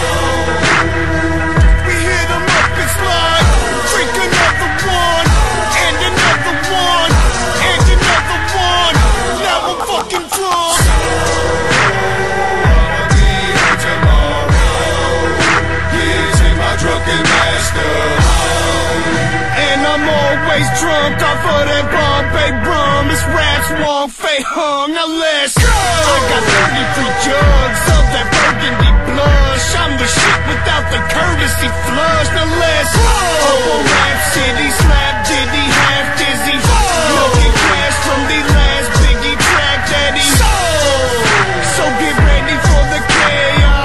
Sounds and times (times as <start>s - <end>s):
Music: 0.0s - 43.8s.